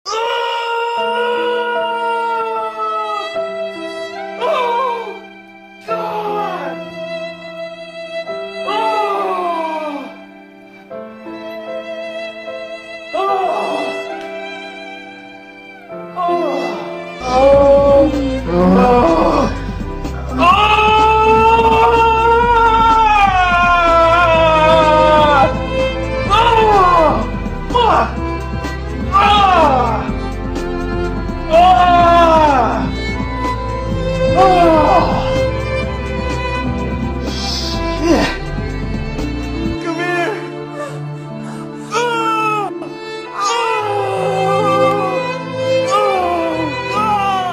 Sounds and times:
Violin, fiddle: 10.1 - 20.4, 22.4 - 47.5.

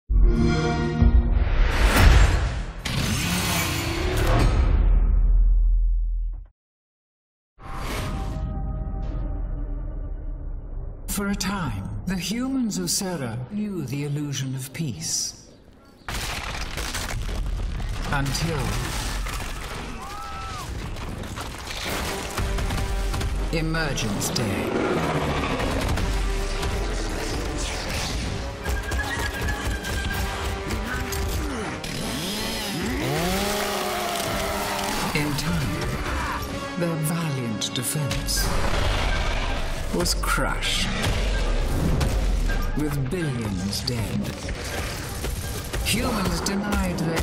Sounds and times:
Music: 0.1 - 2.8, 7.6 - 13.5, 20.7 - 33.0, 33.8 - 47.2.

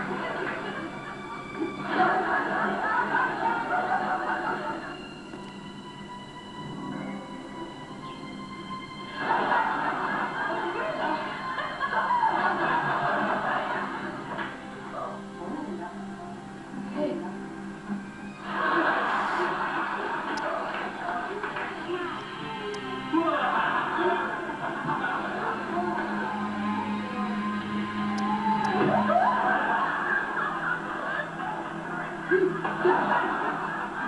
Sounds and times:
Music: 0.0 - 34.0.

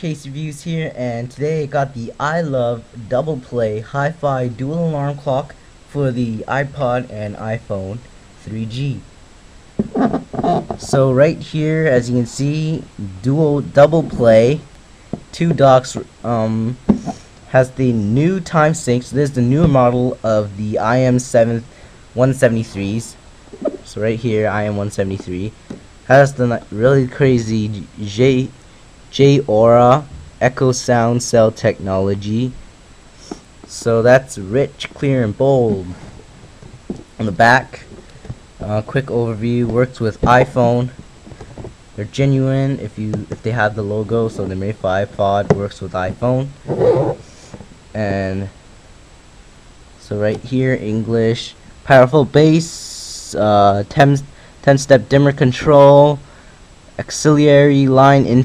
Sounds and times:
Speech: 0.0 - 9.1, 10.0 - 14.7, 15.3 - 32.6, 33.7 - 36.1, 37.2 - 37.9, 38.6 - 41.0, 42.0 - 46.6, 48.0 - 48.6, 50.0 - 56.2, 57.0 - 58.4.

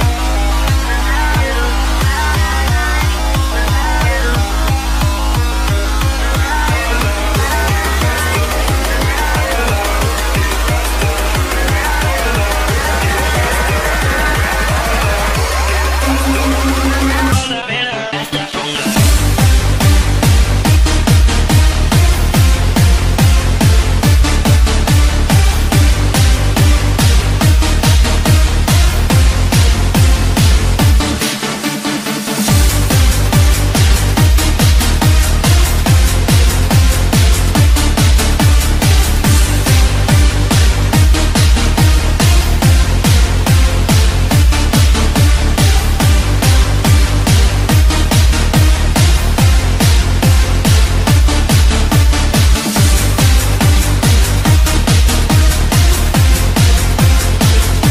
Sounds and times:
Music: 0.0 - 57.9.

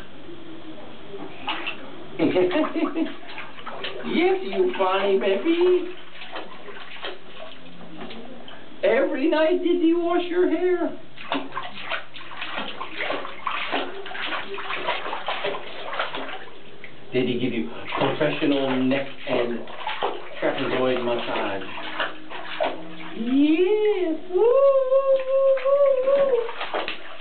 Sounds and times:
Water: 0.0 - 27.2
Bathtub (filling or washing): 1.0 - 27.2.

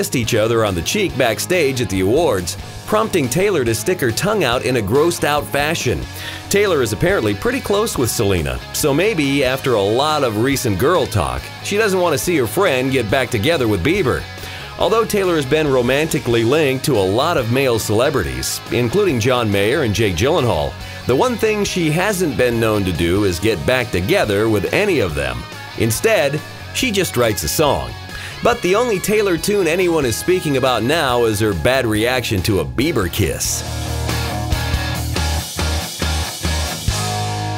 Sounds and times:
Speech: 0.0 - 33.6
Music: 0.0 - 37.5.

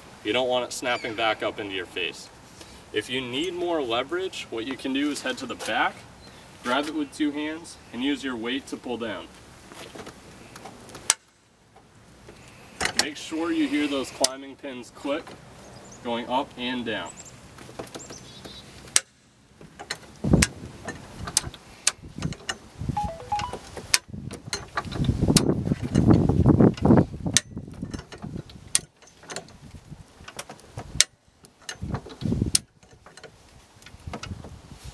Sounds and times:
Speech: 0.2 - 2.3, 2.9 - 6.0, 6.6 - 9.3, 13.0 - 15.3, 16.0 - 17.2.

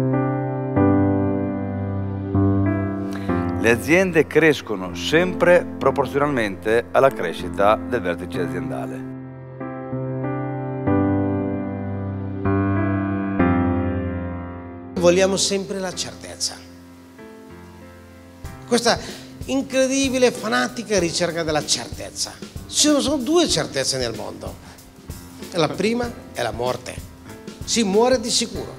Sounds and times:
Music: 0.0 - 28.7
Speech: 3.6 - 9.0, 15.0 - 16.7, 18.7 - 24.6, 25.5 - 27.1, 27.7 - 28.7.

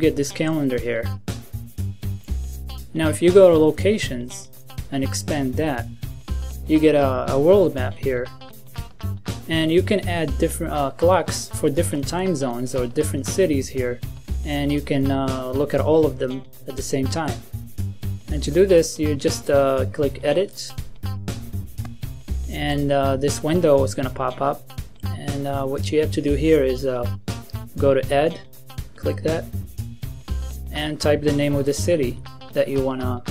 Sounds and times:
Speech: 0.0 - 1.1, 2.9 - 5.9, 6.7 - 8.3, 9.5 - 17.4, 18.3 - 20.8, 22.5 - 24.6, 25.2 - 27.2, 27.8 - 28.4, 29.0 - 29.5, 30.7 - 33.3
Music: 0.0 - 33.3.

